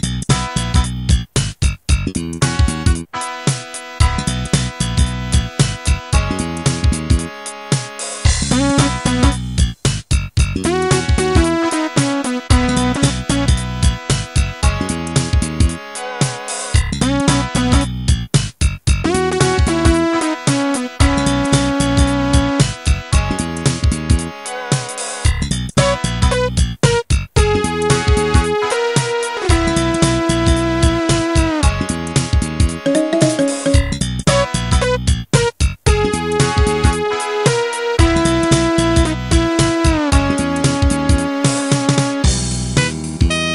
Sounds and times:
Music: 0.0s - 43.5s.

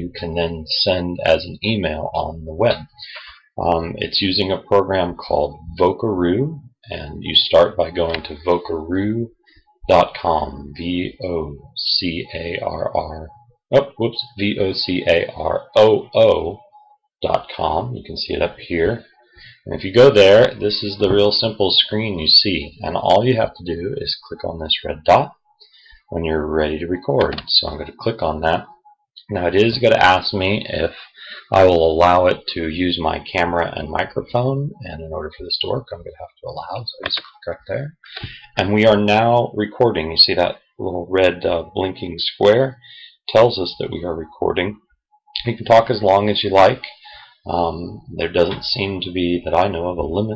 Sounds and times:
Speech: 0.0s - 16.6s, 17.2s - 25.4s, 26.1s - 44.8s, 45.4s - 50.3s.

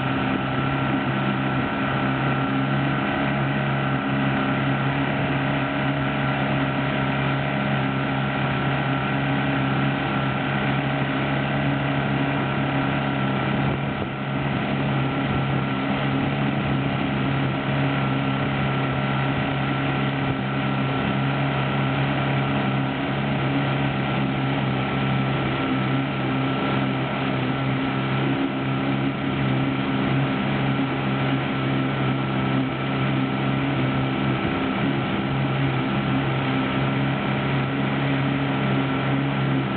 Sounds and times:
Motorboat, speedboat: 0.0s - 39.7s.

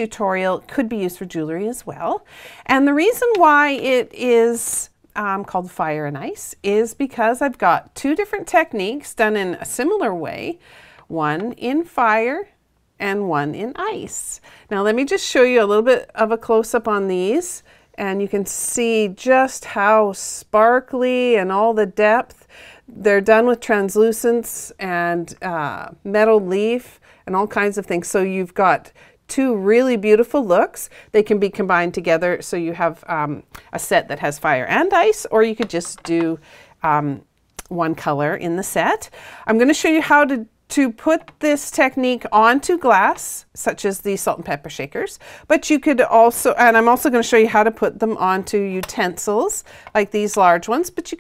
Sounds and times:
Speech: 0.0s - 51.2s.

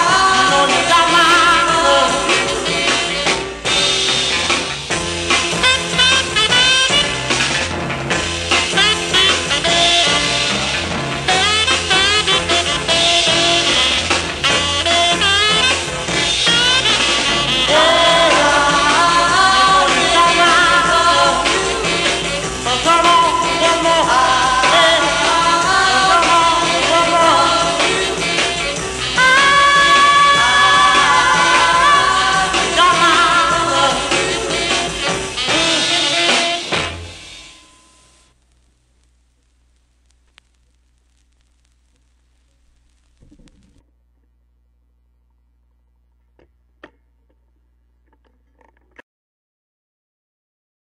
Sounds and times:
Singing: 0.0s - 3.3s, 17.6s - 36.7s
Music: 0.0s - 38.4s.

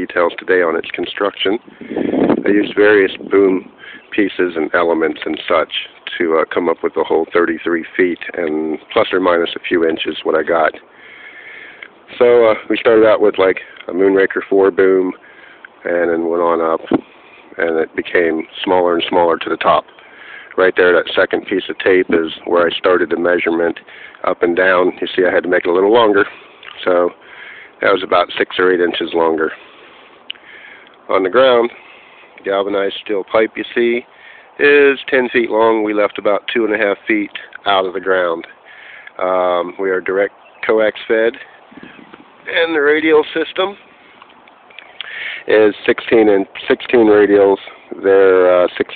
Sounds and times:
Speech: 0.0s - 1.6s, 2.4s - 10.9s, 12.1s - 15.2s, 15.8s - 17.0s, 17.6s - 19.9s, 20.5s - 27.2s, 27.8s - 29.6s, 31.1s - 31.8s, 32.4s - 38.6s, 39.2s - 41.5s, 42.5s - 43.8s, 45.4s - 48.9s.

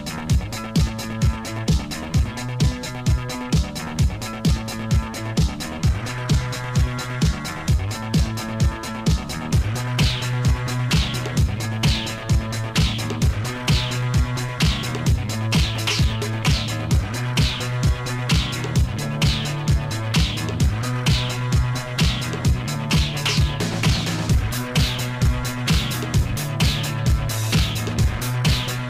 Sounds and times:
Music: 0.0s - 28.8s.

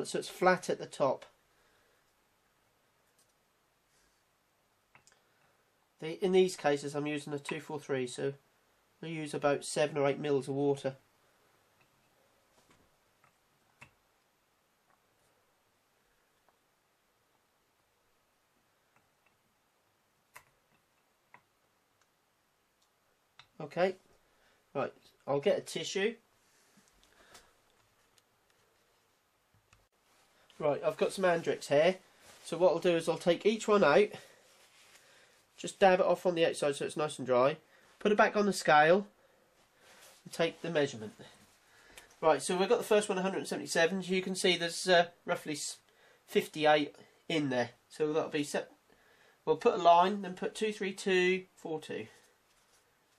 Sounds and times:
Speech: 0.0s - 1.4s, 6.0s - 8.4s, 9.0s - 11.0s, 23.6s - 24.0s, 24.7s - 26.2s, 30.6s - 34.4s, 35.6s - 39.2s, 40.2s - 41.4s, 42.2s - 48.8s, 49.4s - 52.2s
Silence: 1.2s - 6.1s, 11.0s - 25.3s.

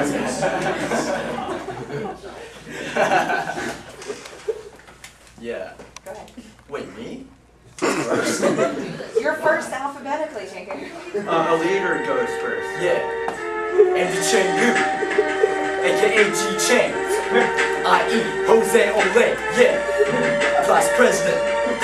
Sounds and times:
Conversation: 0.0s - 21.8s
Male speech, man speaking: 5.4s - 5.8s, 6.7s - 7.3s, 11.2s - 13.1s, 14.0s - 14.8s, 15.8s - 17.2s, 20.6s - 21.4s
Female speech, woman speaking: 6.0s - 6.5s, 8.8s - 11.2s
Music: 11.2s - 21.8s.

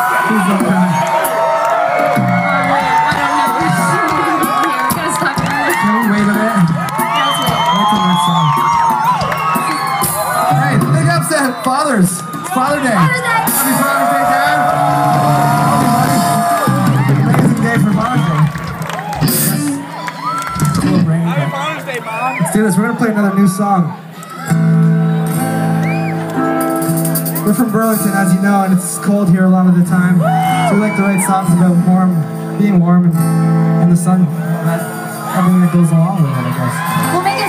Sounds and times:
Whoop: 0.0s - 4.9s, 13.5s - 17.1s, 18.9s - 21.0s, 30.2s - 31.6s
Music: 0.0s - 37.4s.

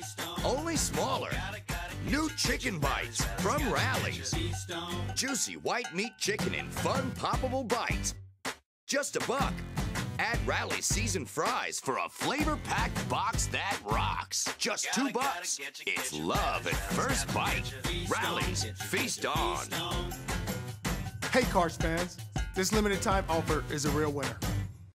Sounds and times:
Music: 0.0s - 24.9s
Speech: 0.4s - 1.4s, 2.1s - 4.4s, 5.2s - 8.2s, 8.9s - 9.6s, 10.2s - 19.7s, 21.3s - 24.4s.

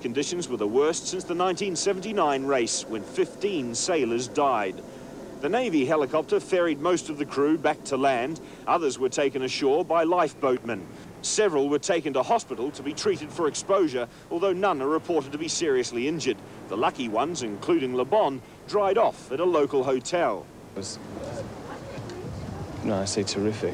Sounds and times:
Speech: 0.0s - 4.8s, 5.4s - 23.7s.

